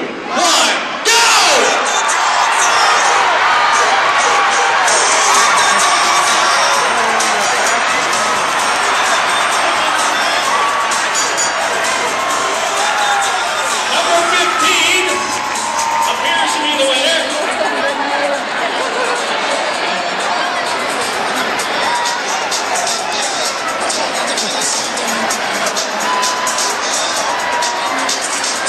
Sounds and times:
Speech: 0:00.3 - 0:02.0, 0:05.6 - 0:10.6, 0:13.7 - 0:15.3, 0:16.1 - 0:26.2
Music: 0:03.0 - 0:28.6.

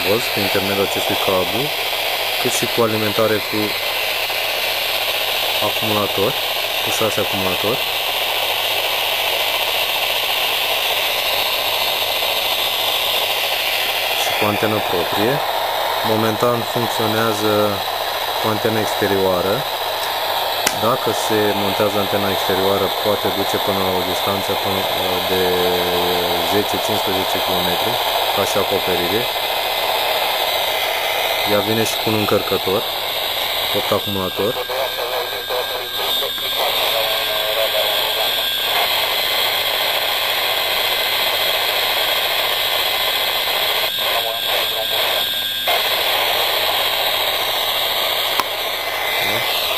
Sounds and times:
Speech: 0:00.0 - 0:01.7, 0:02.4 - 0:03.8, 0:05.6 - 0:07.8, 0:14.2 - 0:19.7, 0:20.7 - 0:29.3, 0:31.5 - 0:32.8, 0:33.7 - 0:38.4, 0:44.0 - 0:45.2, 0:49.2 - 0:49.5.

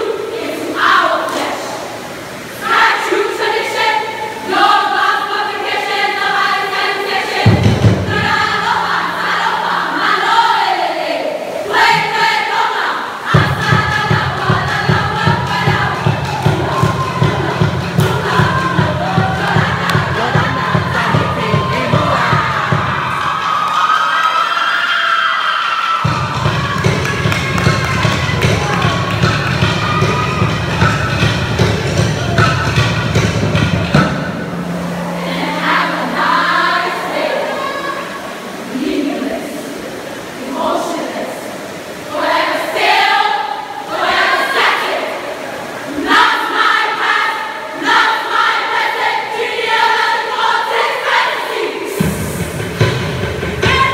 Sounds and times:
Choir: 0:00.0 - 0:53.9.

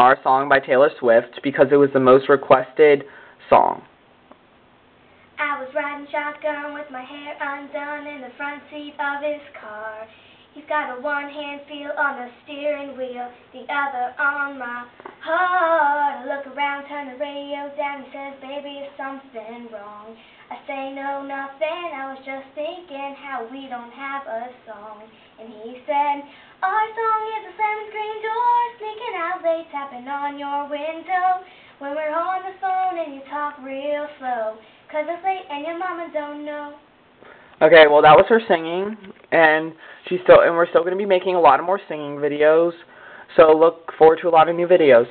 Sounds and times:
Female singing: 0:05.4 - 0:36.9.

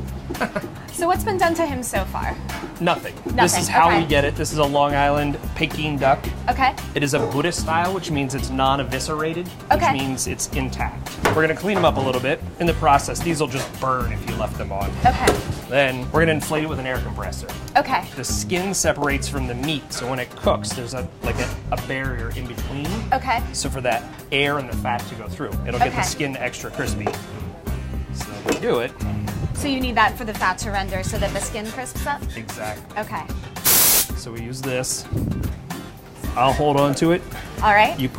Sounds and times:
Music: 0:00.0 - 0:38.1.

